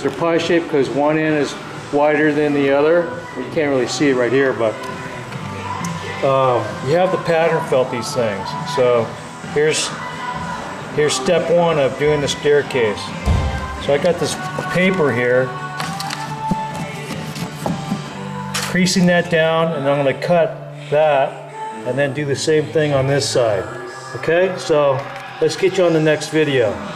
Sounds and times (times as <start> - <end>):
Music: 0.0 - 26.9
Speech: 11.0 - 13.1, 18.8 - 26.8.